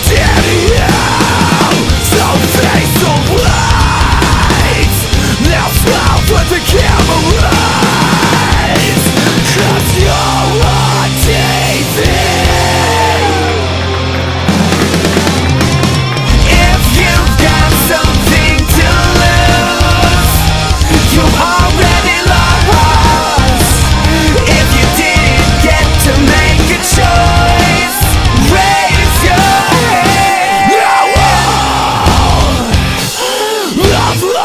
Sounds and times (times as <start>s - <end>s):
Music: 0.0s - 34.4s.